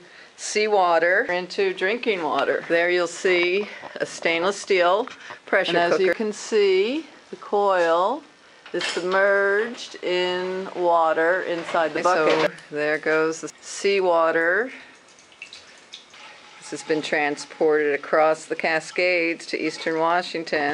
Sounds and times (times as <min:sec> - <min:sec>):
Speech: 0:00.4 - 0:14.8, 0:16.7 - 0:20.7.